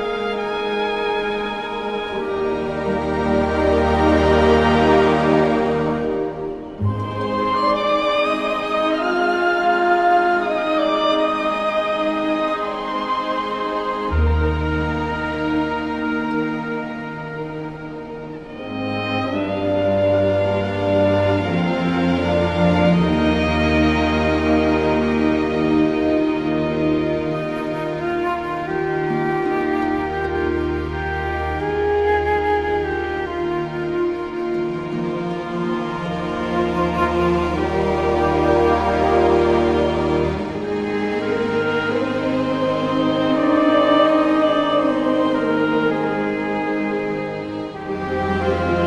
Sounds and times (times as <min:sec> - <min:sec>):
Tender music: 0:00.0 - 0:48.8.